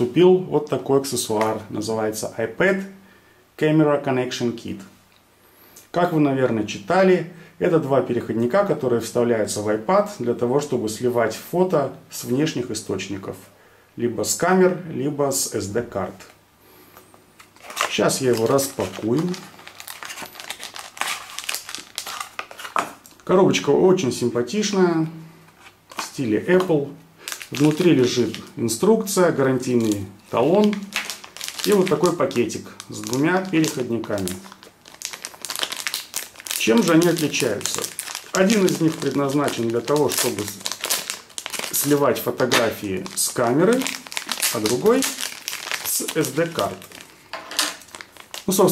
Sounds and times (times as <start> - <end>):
Speech: 0.0 - 3.0, 3.6 - 4.9, 5.9 - 16.4, 17.9 - 19.5, 23.2 - 25.2, 26.0 - 30.9, 31.6 - 34.5, 36.6 - 40.6, 41.7 - 45.2, 45.8 - 46.9, 48.4 - 48.7.